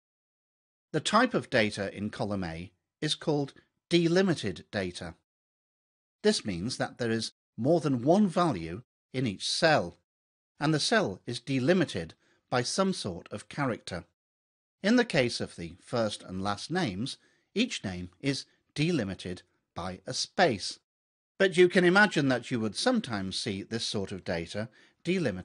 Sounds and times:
Speech: 1.0 - 5.2, 6.2 - 10.0, 10.6 - 14.2, 14.8 - 25.4.

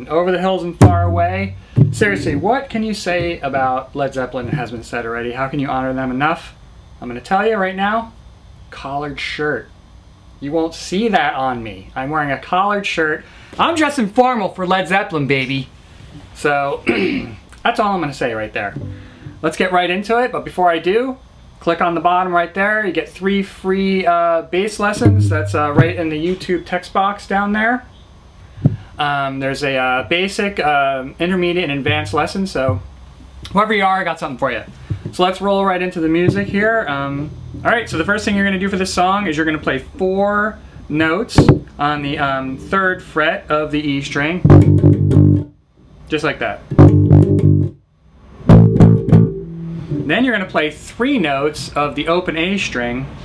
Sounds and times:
Speech: 0.0 - 9.7, 10.4 - 15.7, 16.4 - 18.8, 19.4 - 27.9, 29.0 - 32.8, 33.5 - 44.5, 46.1 - 46.7, 50.1 - 53.2.

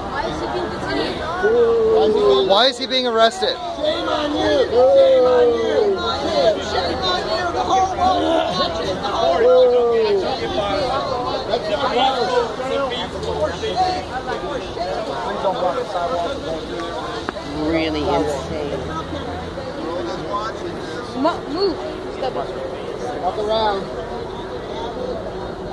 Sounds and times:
Crowd: 0.0 - 25.7.

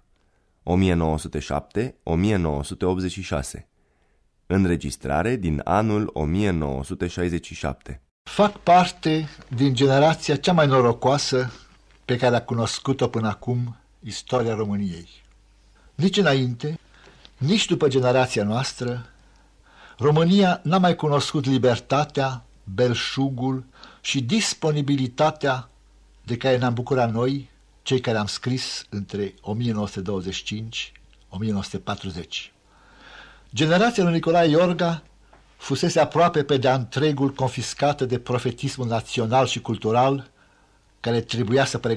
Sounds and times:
Speech: 0.6 - 3.7, 4.5 - 15.3, 16.0 - 16.8, 17.4 - 19.2, 20.0 - 32.6, 33.5 - 40.3, 41.0 - 41.9.

